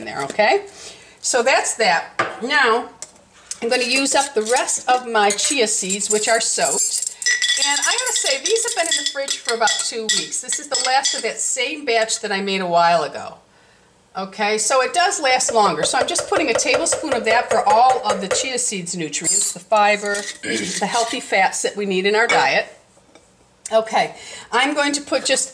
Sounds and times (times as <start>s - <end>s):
Speech: 0.0s - 3.0s, 3.6s - 7.0s, 7.6s - 13.4s, 14.2s - 22.8s, 23.7s - 25.5s.